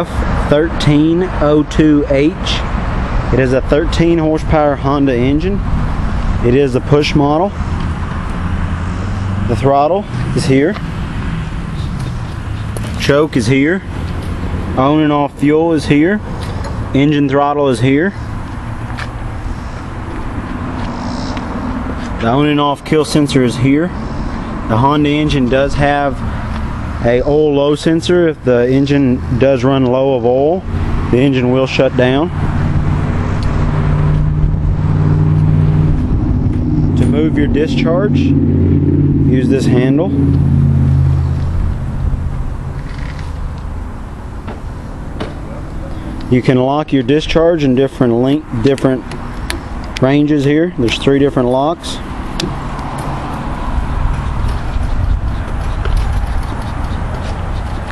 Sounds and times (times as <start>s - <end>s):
Speech: 0.0s - 2.7s, 3.4s - 5.6s, 6.4s - 7.6s, 9.5s - 10.8s, 13.0s - 13.9s, 14.8s - 16.2s, 17.0s - 18.2s, 22.2s - 24.0s, 24.7s - 26.2s, 27.0s - 32.3s, 37.0s - 38.4s, 39.3s - 40.2s, 46.3s - 49.1s, 50.0s - 52.0s.